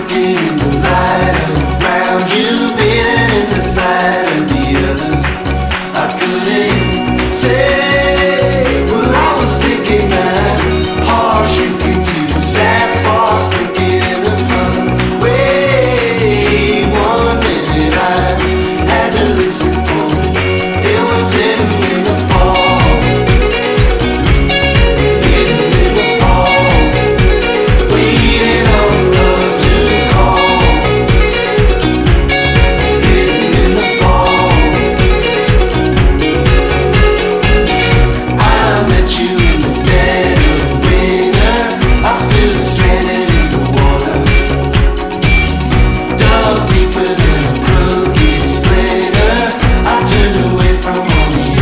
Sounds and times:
Music: 0.0s - 51.6s.

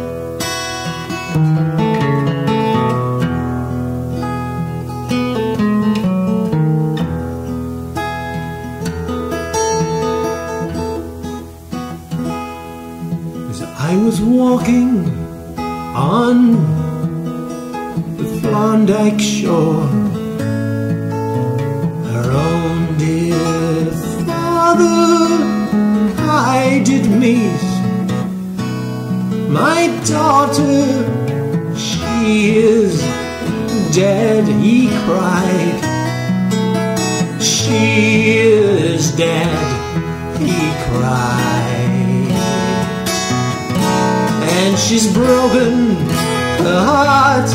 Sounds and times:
Acoustic guitar: 0.0s - 47.5s
Country: 0.0s - 47.5s.

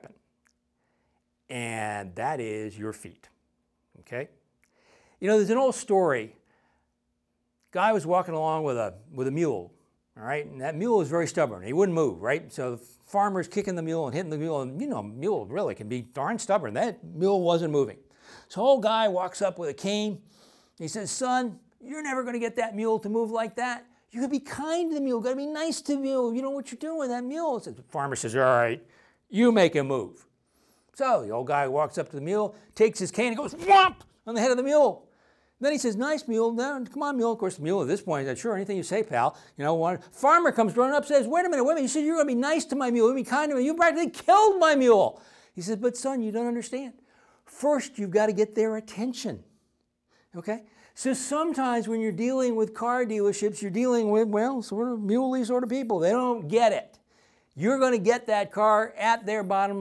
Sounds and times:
Speech: 0.0s - 0.2s, 1.5s - 3.4s, 4.0s - 4.4s, 5.2s - 6.4s, 7.7s - 20.2s, 20.8s - 30.3s, 31.0s - 35.0s, 35.6s - 49.4s, 50.4s - 57.0s, 57.6s - 59.8s.

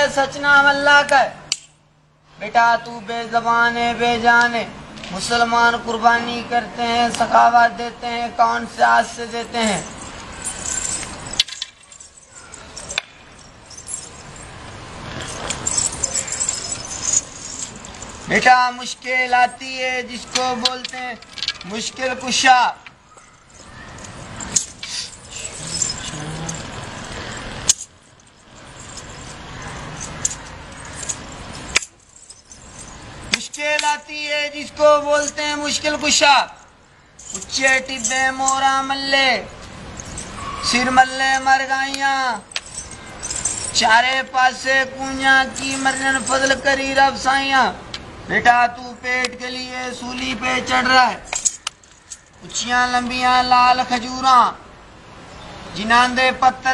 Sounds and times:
Speech: 2.4s - 9.8s, 18.3s - 22.8s, 33.4s - 36.6s, 37.4s - 39.5s, 40.6s - 42.4s, 43.8s - 51.3s, 52.4s - 54.6s, 55.8s - 56.7s.

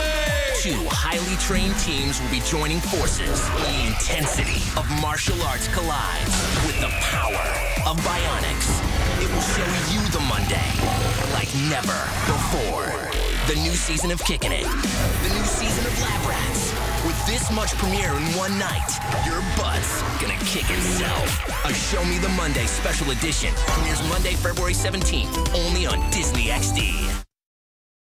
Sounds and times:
Speech: 0.0s - 27.2s
Music: 0.0s - 27.3s.

